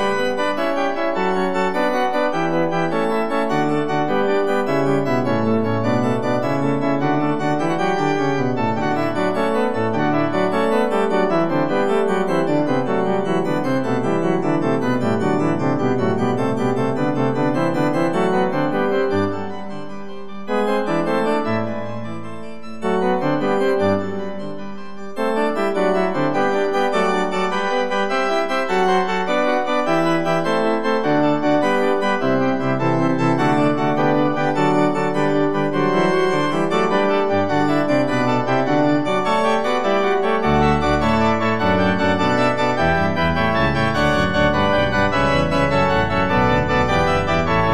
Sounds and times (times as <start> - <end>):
Music: 0.0 - 47.7.